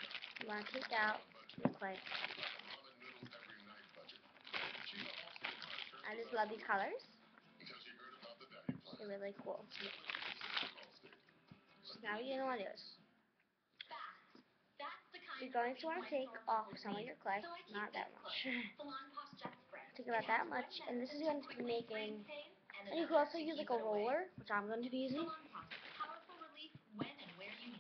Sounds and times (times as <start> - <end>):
Music: 0.0 - 13.3
Inside, small room: 0.0 - 27.8
Child speech, kid speaking: 0.4 - 2.0, 6.1 - 7.0, 9.0 - 9.7, 12.0 - 13.0, 13.8 - 27.8.